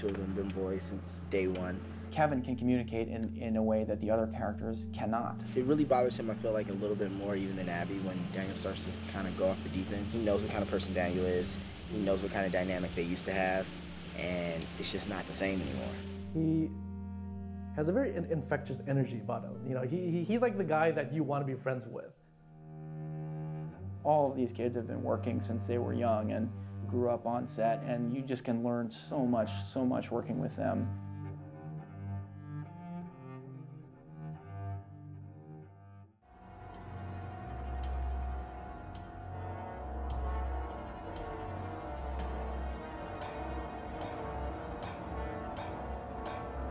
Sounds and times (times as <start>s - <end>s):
Speech: 0.0s - 16.8s, 17.8s - 22.1s, 24.1s - 30.9s
Music: 0.0s - 46.7s.